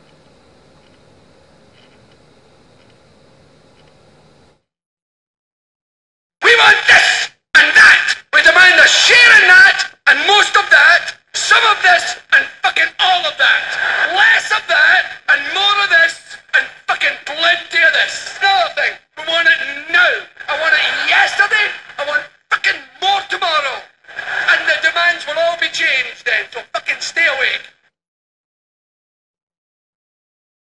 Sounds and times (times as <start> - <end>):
Male speech, man speaking: 6.4 - 27.8.